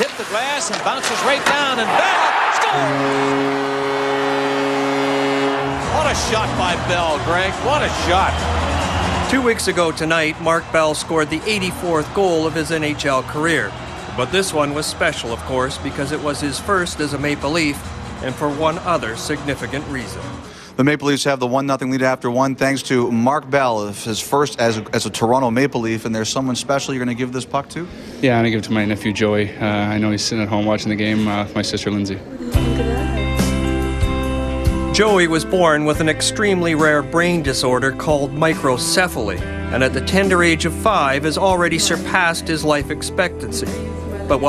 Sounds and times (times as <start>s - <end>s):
Music: 5.5s - 20.6s, 32.4s - 44.4s
Speech: 9.3s - 20.2s, 35.0s - 44.4s.